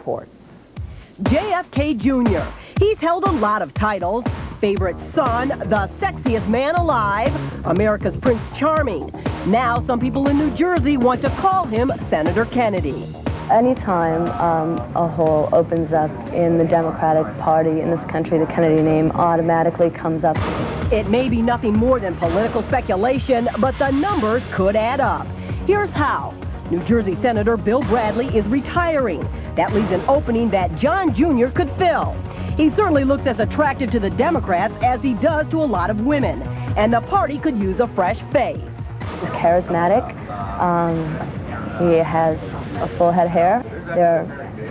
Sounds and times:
Music: 0.0 - 44.7
Speech: 1.2 - 38.6, 39.2 - 44.7.

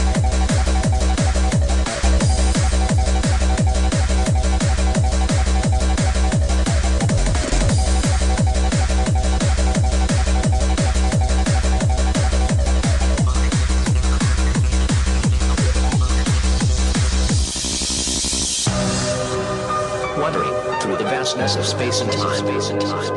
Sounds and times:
Techno: 0.0 - 23.1.

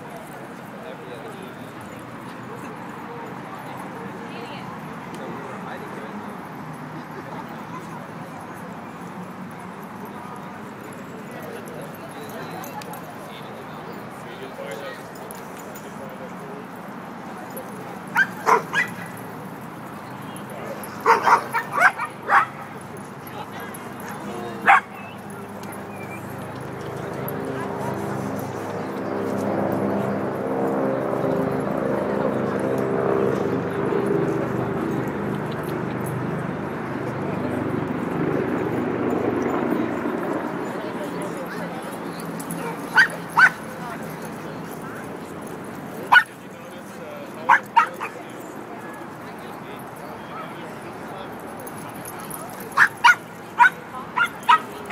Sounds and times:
Speech: 0.0 - 54.9.

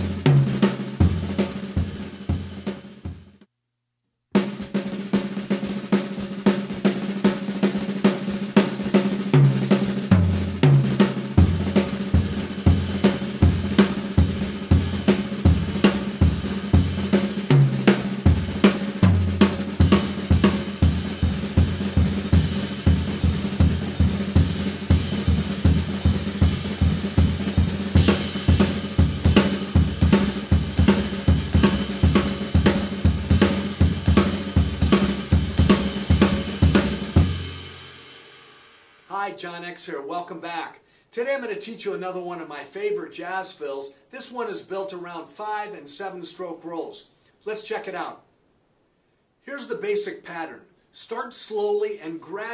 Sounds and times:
Music: 0.0 - 3.5, 4.3 - 39.1.

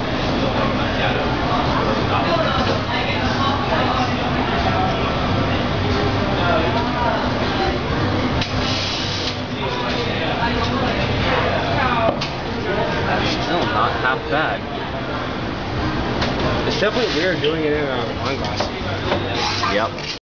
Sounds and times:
Speech: 0.3 - 8.2, 16.6 - 20.2.

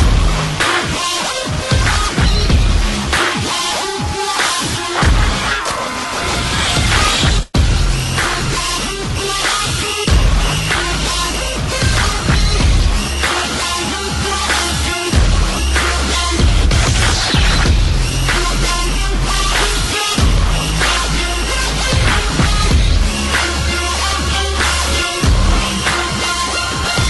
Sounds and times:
Music: 0.0 - 27.1.

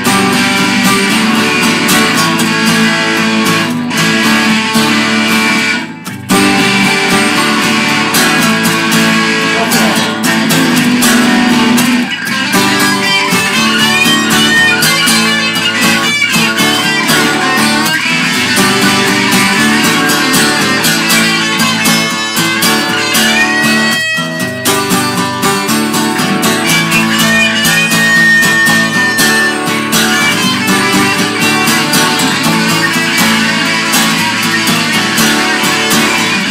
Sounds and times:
Rock and roll: 0.0 - 36.5.

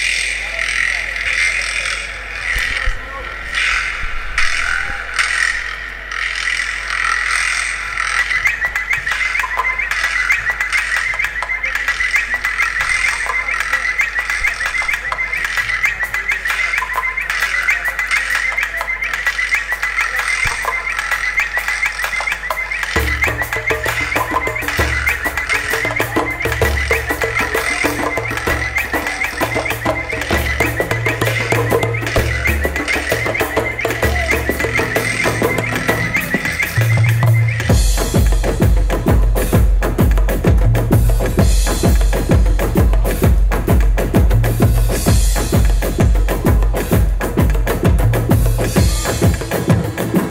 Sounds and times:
Speech: 0.0 - 3.9, 11.2 - 21.8, 33.8 - 36.2, 48.8 - 49.5
Music: 8.0 - 50.3.

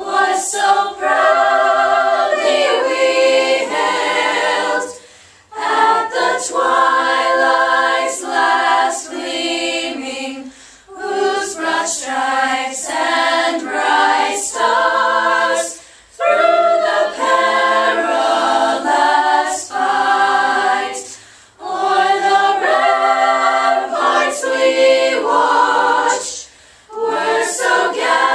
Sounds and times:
Choir: 0.0 - 28.3.

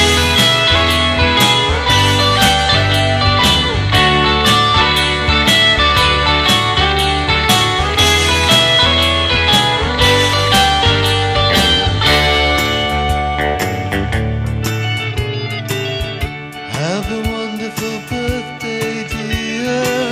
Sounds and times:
Music: 0.0 - 20.1.

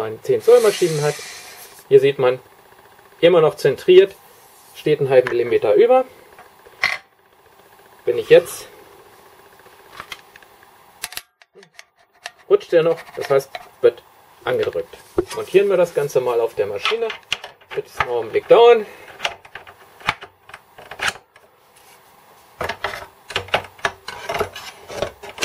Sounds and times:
Speech: 0.0 - 1.2, 1.9 - 2.4, 3.2 - 4.2, 4.8 - 6.1, 8.0 - 8.8, 12.5 - 18.9.

